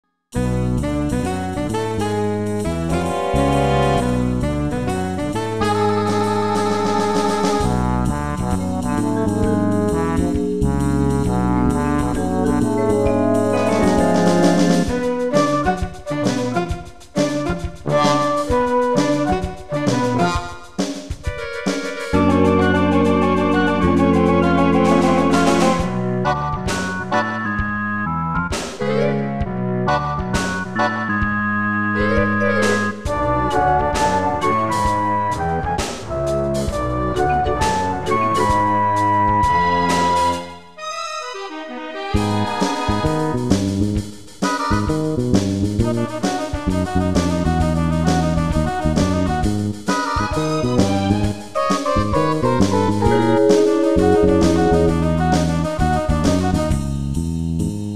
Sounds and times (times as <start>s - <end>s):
Soundtrack music: 2.7s - 16.4s, 22.1s - 26.4s, 51.8s - 56.7s.